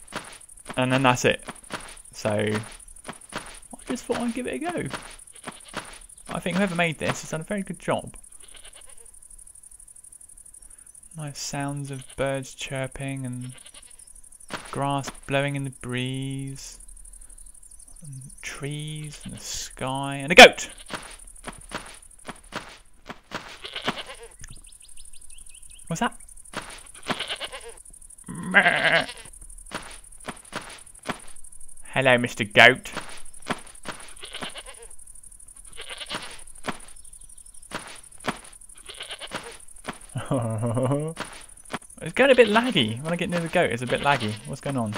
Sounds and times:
Goat: 0:00.1 - 0:07.3, 0:20.5 - 0:24.6, 0:26.5 - 0:31.2, 0:32.9 - 0:34.9, 0:35.6 - 0:37.0, 0:37.7 - 0:44.9
Speech: 0:00.8 - 0:01.4, 0:02.2 - 0:02.7, 0:03.8 - 0:05.0, 0:06.3 - 0:08.2, 0:11.2 - 0:13.6, 0:14.8 - 0:16.8, 0:18.0 - 0:20.7, 0:25.9 - 0:26.2, 0:31.9 - 0:33.0, 0:42.0 - 0:44.9.

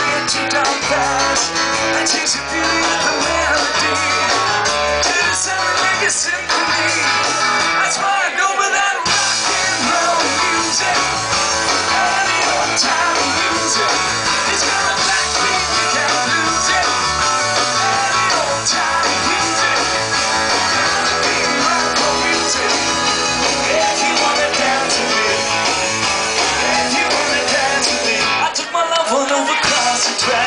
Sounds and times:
Rock and roll: 0:00.0 - 0:30.4.

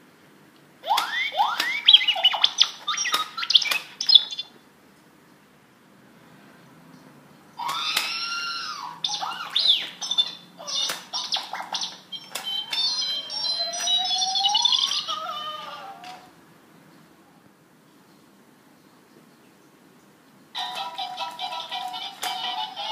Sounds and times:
Inside, small room: 0:00.0 - 0:22.9
Alarm clock: 0:12.2 - 0:15.1.

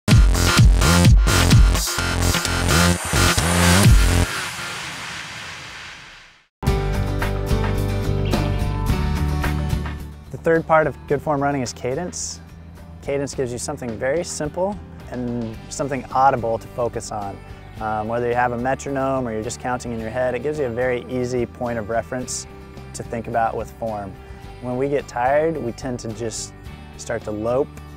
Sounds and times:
Electronic dance music: 0:00.1 - 0:06.3.

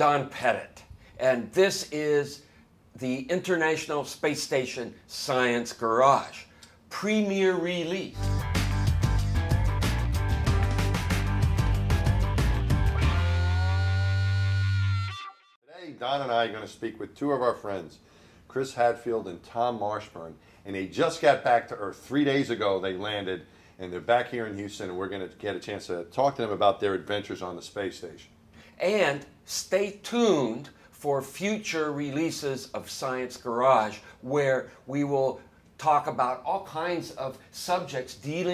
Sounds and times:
Speech: 0:00.0 - 0:08.2, 0:15.7 - 0:38.5.

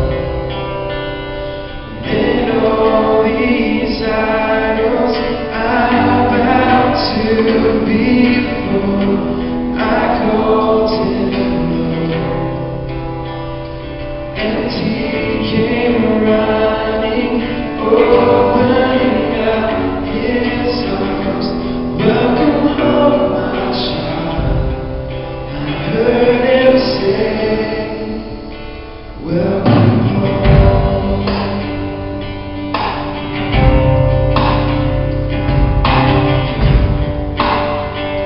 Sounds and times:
Vocal music: 0:00.0 - 0:38.2
Singing: 0:01.9 - 0:12.4, 0:14.4 - 0:24.9, 0:25.5 - 0:28.5.

